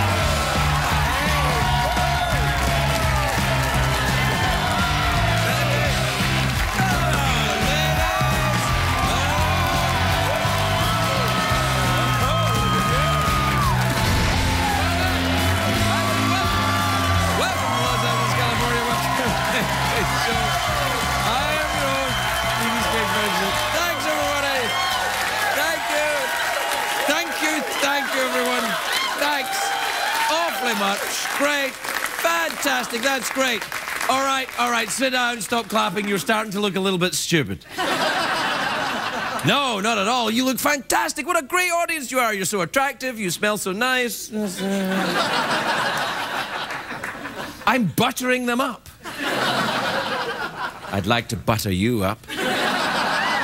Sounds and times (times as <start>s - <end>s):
Speech: 30.3s - 37.6s, 39.4s - 45.0s, 47.7s - 48.9s, 50.9s - 52.3s.